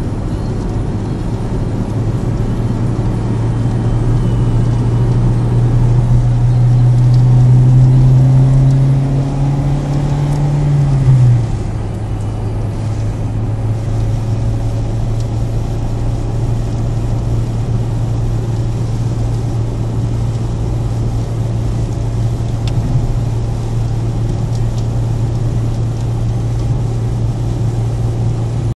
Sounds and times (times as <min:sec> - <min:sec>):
Raindrop: 0:00.0 - 0:28.7.